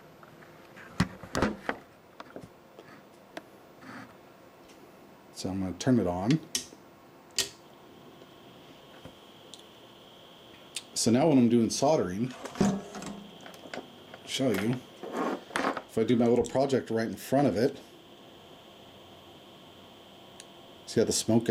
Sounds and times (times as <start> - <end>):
Speech: 5.4 - 6.5, 10.9 - 12.4, 14.3 - 14.8, 15.9 - 17.8, 20.9 - 21.5.